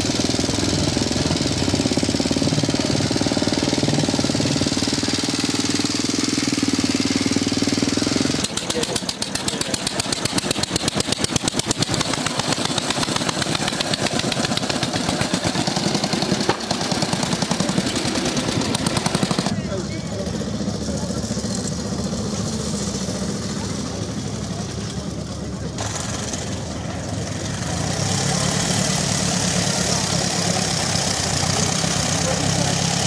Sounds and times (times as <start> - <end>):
Motorcycle: 0.0 - 33.0
Speech: 8.5 - 10.0, 19.5 - 21.7, 23.4 - 25.8, 31.6 - 33.0.